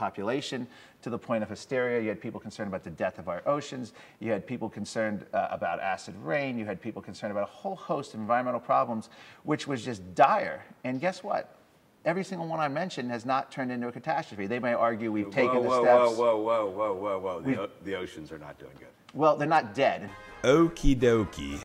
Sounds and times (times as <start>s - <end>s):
Speech: 0.0s - 21.6s
Music: 20.0s - 21.6s.